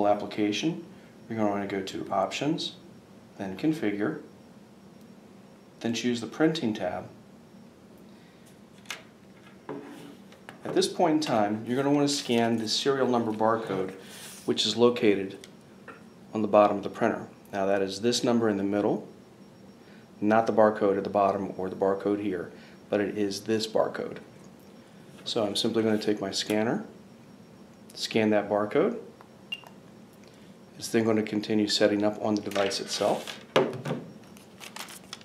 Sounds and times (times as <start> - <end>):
Speech: 0.0 - 2.8, 3.4 - 4.3, 5.8 - 7.2, 10.7 - 15.4, 16.3 - 19.1, 20.2 - 24.3, 25.3 - 27.0, 27.9 - 29.1, 30.8 - 33.4.